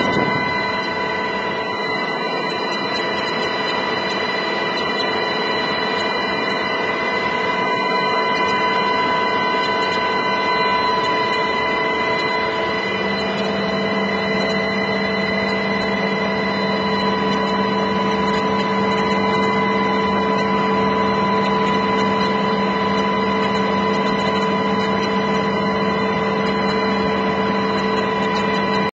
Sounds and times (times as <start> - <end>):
Aircraft: 0.0 - 28.9.